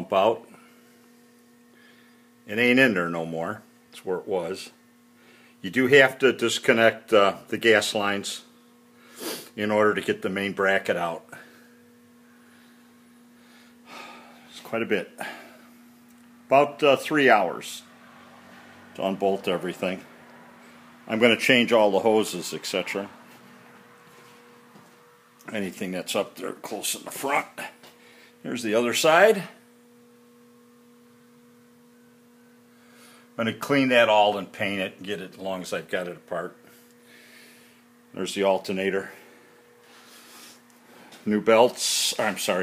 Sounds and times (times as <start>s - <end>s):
Speech: 0.0s - 0.6s, 2.5s - 4.8s, 5.6s - 8.5s, 9.6s - 11.4s, 14.5s - 15.2s, 16.5s - 17.9s, 19.0s - 20.1s, 21.1s - 23.1s, 25.5s - 27.8s, 28.4s - 29.6s, 33.4s - 36.6s, 38.2s - 39.2s, 41.2s - 42.6s.